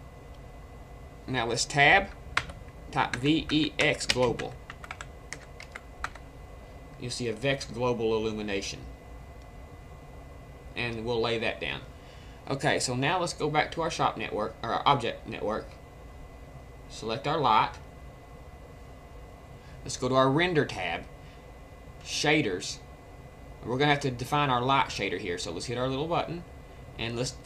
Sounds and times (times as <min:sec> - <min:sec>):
Speech: 0:01.3 - 0:02.1, 0:02.9 - 0:04.6, 0:07.0 - 0:08.9, 0:10.8 - 0:11.9, 0:12.5 - 0:15.8, 0:16.9 - 0:17.8, 0:19.8 - 0:21.1, 0:22.0 - 0:22.8, 0:23.6 - 0:27.4
Computer keyboard: 0:02.4 - 0:06.2.